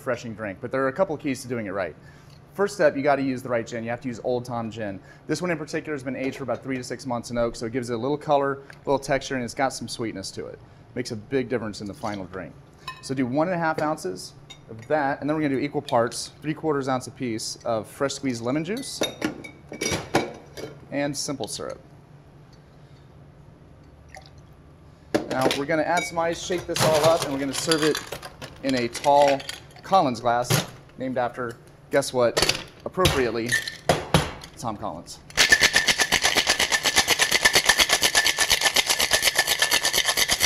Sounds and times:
Speech: 0.0s - 2.0s, 2.6s - 19.1s, 20.9s - 21.8s, 25.3s - 28.0s, 28.6s - 33.6s, 34.6s - 35.3s.

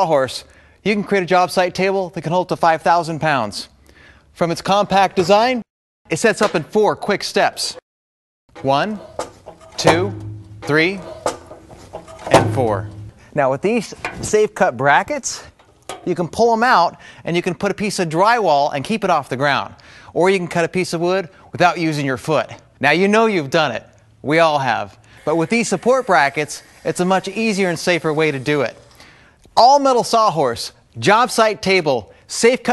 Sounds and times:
Speech: 0.0s - 3.7s, 4.4s - 7.8s, 8.6s - 9.0s, 9.8s - 11.1s, 12.3s - 15.5s, 16.1s - 28.8s, 29.6s - 32.7s.

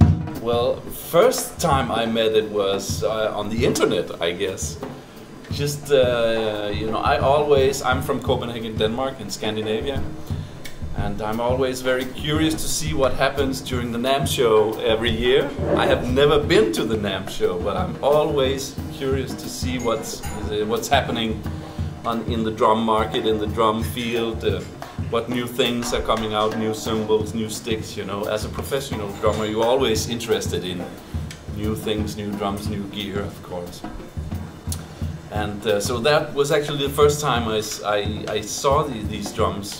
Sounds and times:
Drum: 0.0s - 39.7s
Drum kit: 0.0s - 39.7s
Speech: 0.4s - 4.8s, 5.5s - 10.1s, 11.0s - 34.0s, 35.3s - 39.7s.

